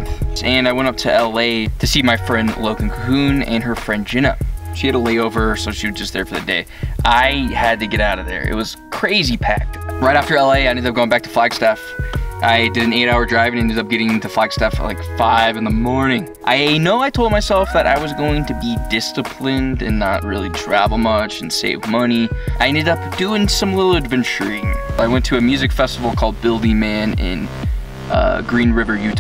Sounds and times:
Speech: 0:00.0 - 0:29.2
Tender music: 0:00.0 - 0:29.2.

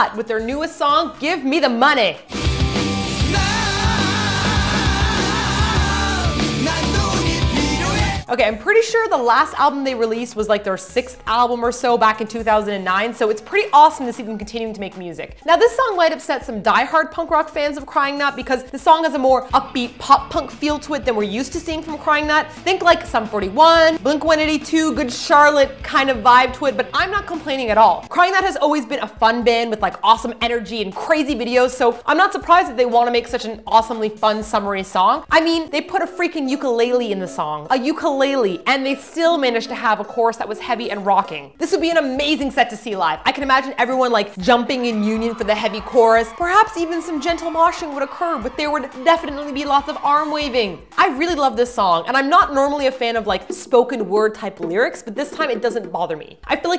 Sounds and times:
Speech: 0:00.0 - 0:02.3, 0:08.2 - 0:56.7
Independent music: 0:00.0 - 0:56.7.

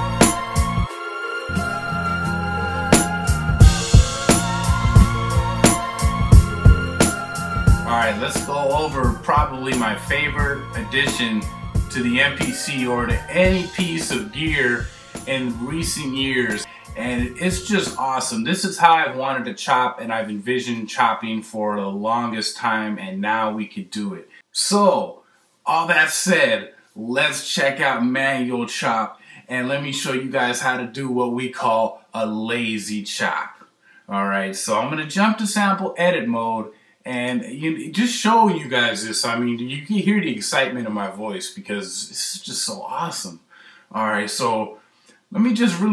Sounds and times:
Music: 0:00.0 - 0:18.4, 0:45.7 - 0:45.9
Speech: 0:07.9 - 0:45.9.

